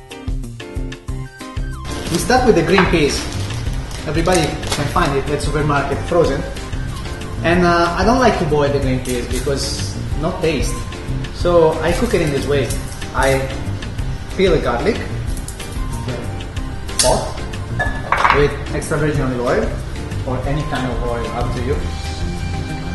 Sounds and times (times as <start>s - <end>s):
Music: 0.0s - 22.9s
Speech: 2.1s - 3.3s, 4.0s - 6.5s, 7.4s - 10.8s, 11.4s - 13.5s, 14.4s - 15.1s, 18.3s - 21.9s.